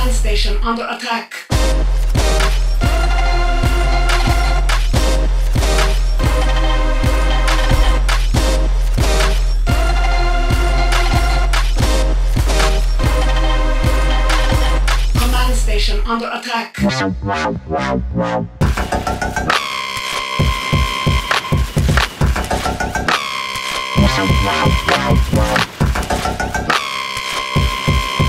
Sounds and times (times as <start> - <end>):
Speech: 0.0 - 1.5, 15.2 - 17.0, 24.0 - 25.2
Dubstep: 1.5 - 16.1, 16.8 - 28.2.